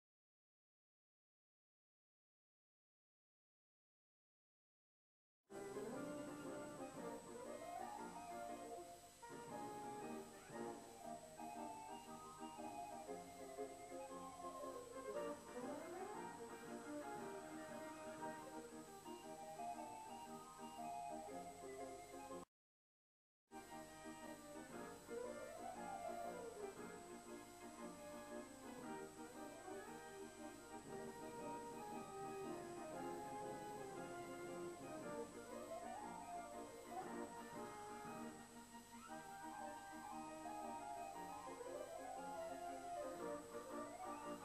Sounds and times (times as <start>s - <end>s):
Music: 5.5s - 22.5s, 23.5s - 44.4s.